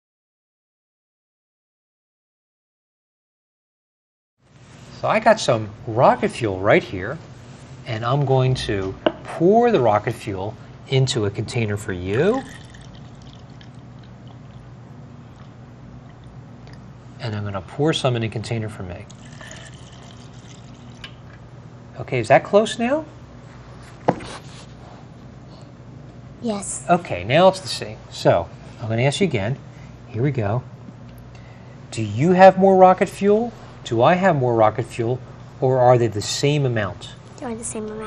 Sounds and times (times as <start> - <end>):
Speech: 5.0 - 7.2, 7.9 - 12.5, 17.2 - 19.1, 22.0 - 23.1, 26.4 - 30.7, 31.9 - 38.0.